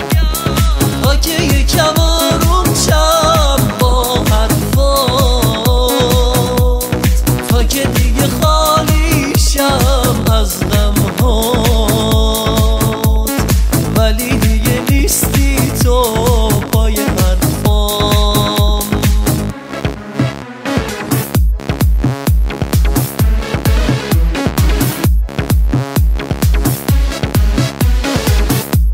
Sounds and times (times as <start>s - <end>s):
Exciting music: 0.0s - 28.9s
House music: 0.0s - 28.9s
Rhythm and blues: 0.0s - 28.9s
Trance music: 0.0s - 28.9s.